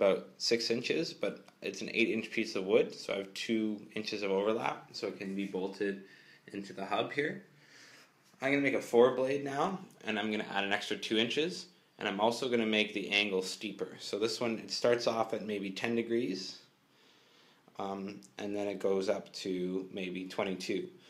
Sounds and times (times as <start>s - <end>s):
Speech: 0.0s - 7.5s, 8.4s - 16.7s, 17.8s - 21.0s.